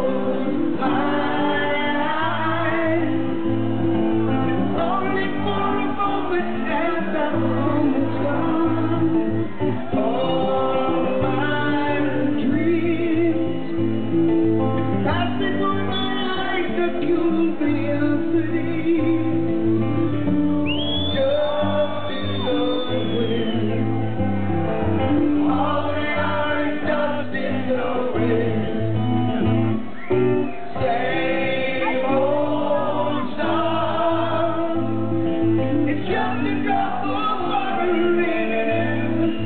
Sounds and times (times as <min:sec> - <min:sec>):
Music: 0:00.0 - 0:39.4.